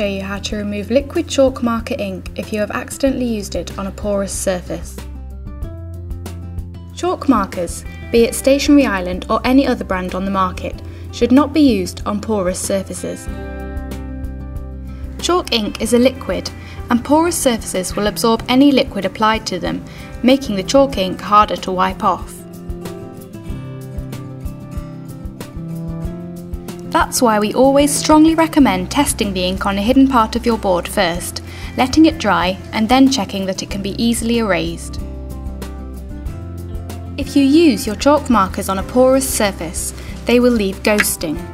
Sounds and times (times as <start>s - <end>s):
Speech: 0.0s - 5.0s, 7.0s - 13.3s, 15.2s - 22.4s, 26.9s - 35.0s, 37.2s - 41.5s
Music: 0.0s - 41.5s.